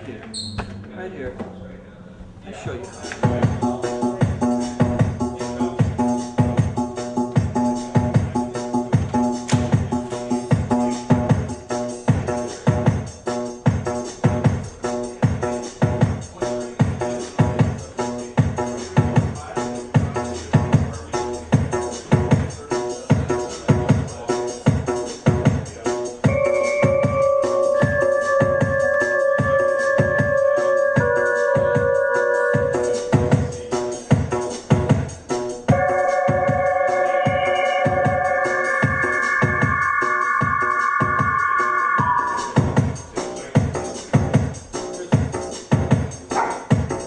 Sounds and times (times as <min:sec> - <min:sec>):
Speech: 0:00.0 - 0:04.3, 0:05.3 - 0:06.1, 0:16.3 - 0:21.4, 0:22.1 - 0:24.7, 0:43.2 - 0:44.2.